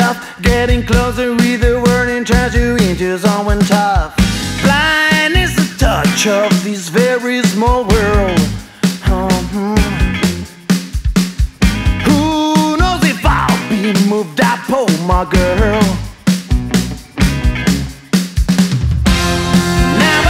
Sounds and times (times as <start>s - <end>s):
Reggae: 0.0s - 20.3s.